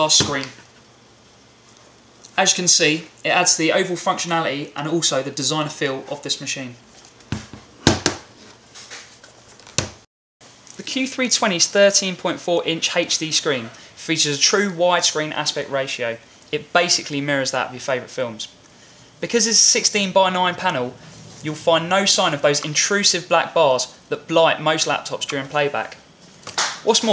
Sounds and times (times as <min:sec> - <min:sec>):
Speech: 0:00.0 - 0:00.6, 0:02.3 - 0:06.8, 0:10.8 - 0:18.6, 0:19.2 - 0:26.0, 0:26.8 - 0:27.1.